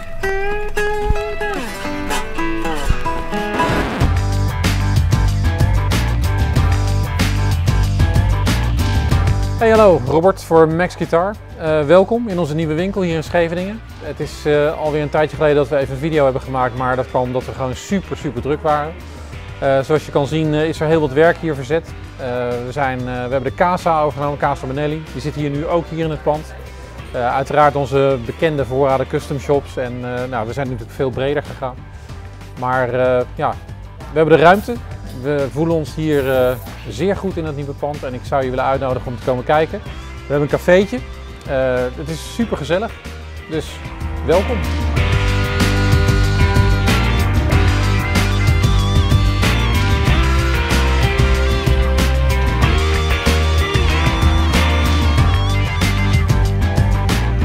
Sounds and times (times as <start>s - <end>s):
Speech: 9.6s - 19.0s, 19.6s - 26.5s, 27.1s - 31.8s, 32.6s - 42.9s, 43.5s - 44.7s.